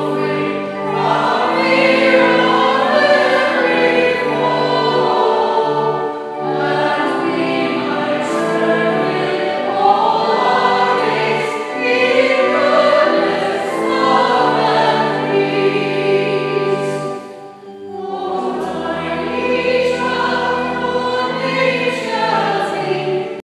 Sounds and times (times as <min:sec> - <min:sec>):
Christmas music: 0:00.0 - 0:23.4.